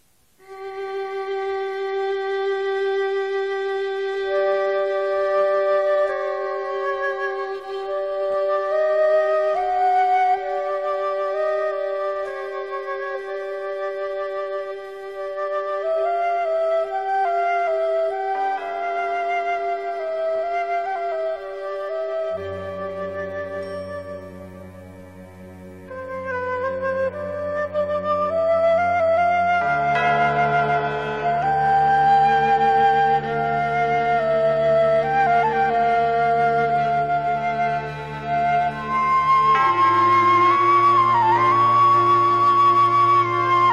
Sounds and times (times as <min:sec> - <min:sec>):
Flute: 0:00.0 - 0:43.7.